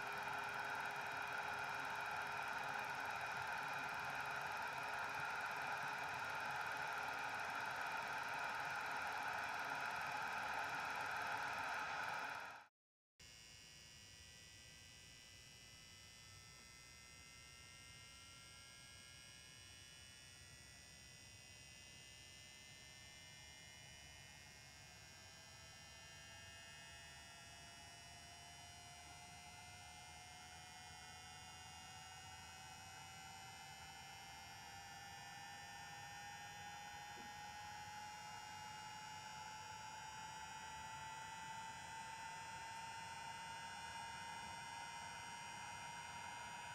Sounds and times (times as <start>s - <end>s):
White noise: 0.0s - 12.6s.